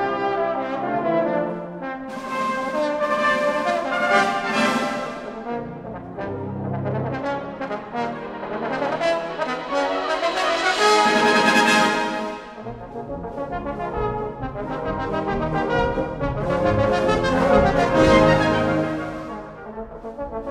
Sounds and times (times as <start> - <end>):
Trombone: 0.0 - 20.5.